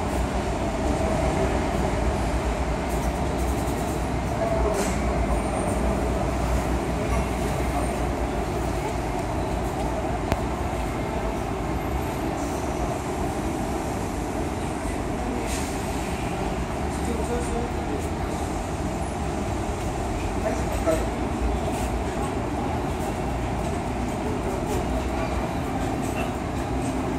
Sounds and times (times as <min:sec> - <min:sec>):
Vehicle: 0:00.0 - 0:27.1.